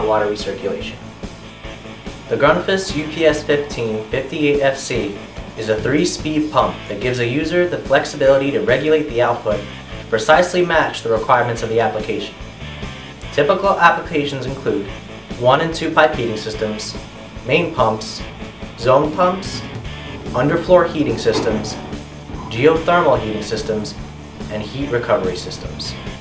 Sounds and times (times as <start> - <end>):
Speech: 0.0 - 1.0, 2.3 - 12.4, 13.3 - 26.1
Music: 0.0 - 26.2.